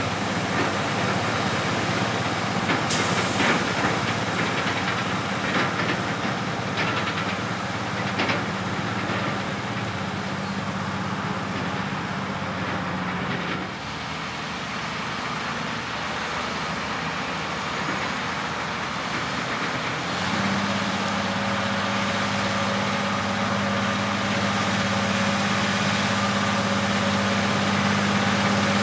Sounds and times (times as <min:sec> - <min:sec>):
Truck: 0:00.0 - 0:28.8.